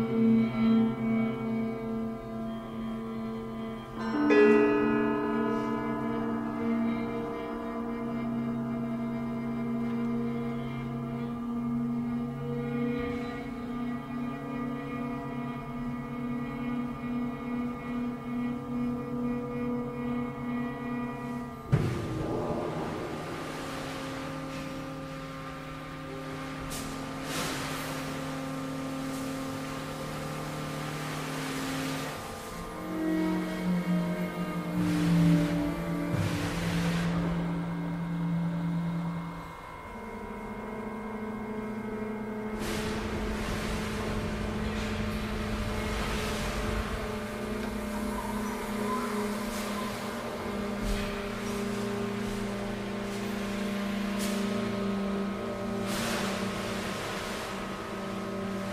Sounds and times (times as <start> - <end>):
Music: 0.0 - 58.7.